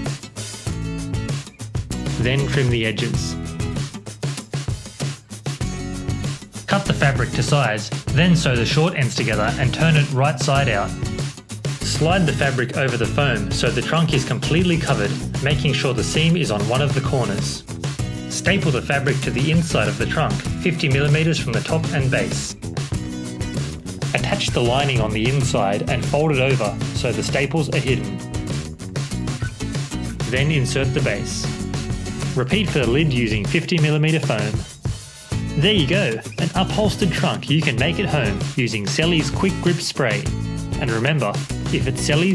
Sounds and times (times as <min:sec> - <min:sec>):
Music: 0:00.0 - 0:42.3
Speech: 0:02.2 - 0:03.4, 0:06.7 - 0:11.0, 0:11.8 - 0:17.6, 0:18.3 - 0:22.6, 0:24.1 - 0:28.2, 0:30.2 - 0:31.6, 0:32.4 - 0:34.8, 0:35.6 - 0:42.3.